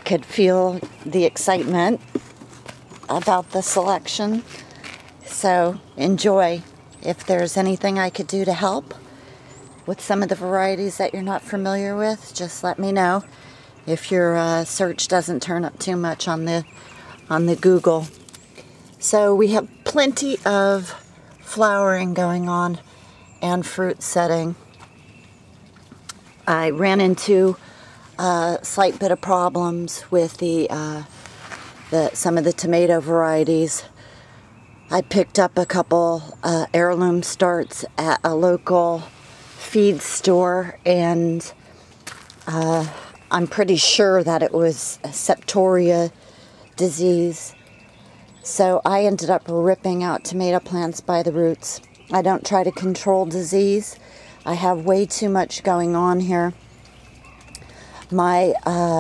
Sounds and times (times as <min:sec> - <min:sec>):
Speech: 0:00.0 - 0:02.0, 0:03.1 - 0:04.5, 0:05.2 - 0:09.0, 0:09.9 - 0:13.3, 0:13.9 - 0:16.7, 0:17.3 - 0:18.1, 0:19.0 - 0:22.8, 0:23.4 - 0:24.6, 0:26.5 - 0:27.6, 0:28.2 - 0:31.1, 0:31.9 - 0:33.9, 0:34.9 - 0:41.6, 0:42.5 - 0:46.1, 0:46.8 - 0:47.6, 0:48.5 - 0:56.6, 0:58.1 - 0:59.0.